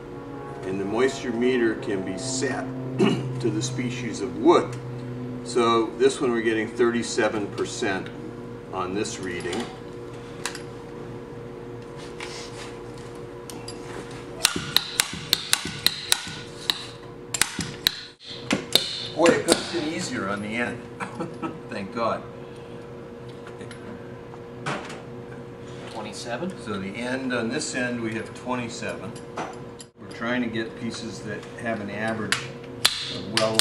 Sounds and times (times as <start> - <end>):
Speech: 8.8 - 9.8, 19.2 - 20.9, 21.7 - 22.3, 25.9 - 29.2, 30.0 - 32.5, 33.2 - 33.6.